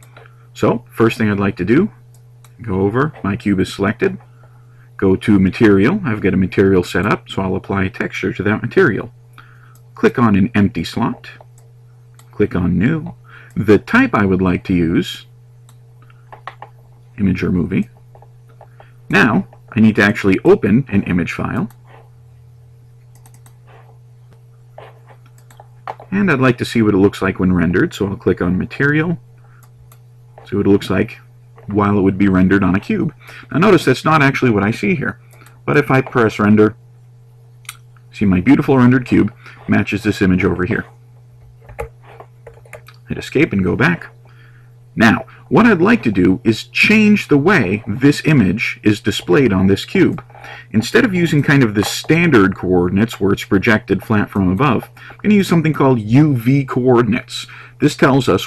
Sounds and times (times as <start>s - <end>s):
Speech: 0.6s - 2.0s, 2.6s - 4.2s, 5.0s - 9.2s, 10.0s - 11.4s, 12.4s - 15.3s, 17.2s - 17.9s, 19.1s - 21.8s, 26.1s - 29.2s, 30.4s - 36.8s, 38.1s - 41.0s, 43.0s - 44.2s, 45.0s - 58.4s.